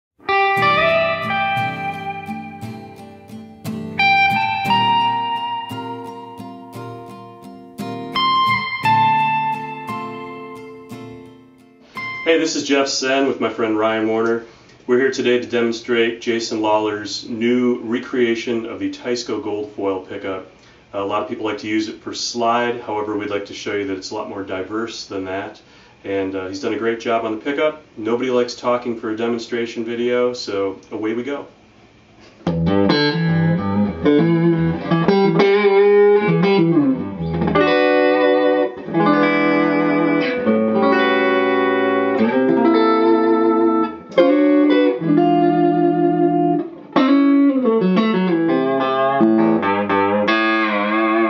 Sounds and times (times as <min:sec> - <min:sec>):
Electric guitar: 0:00.2 - 0:12.5, 0:32.4 - 0:51.2.